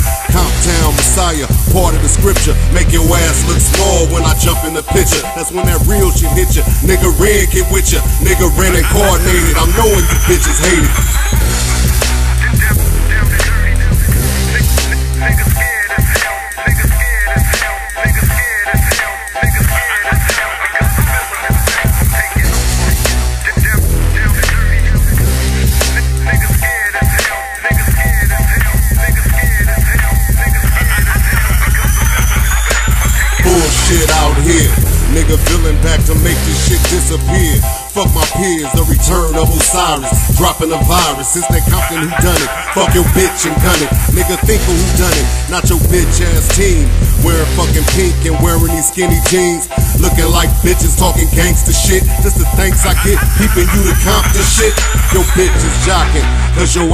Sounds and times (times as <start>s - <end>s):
Hip hop music: 0.0s - 56.9s.